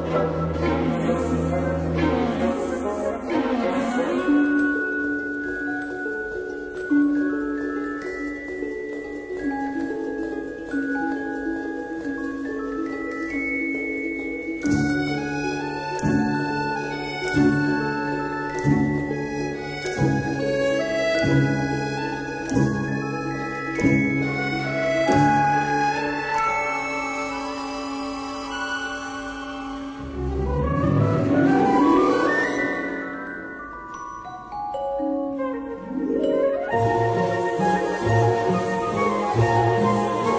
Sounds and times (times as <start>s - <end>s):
Vibraphone: 4.2s - 29.9s, 31.4s - 38.6s.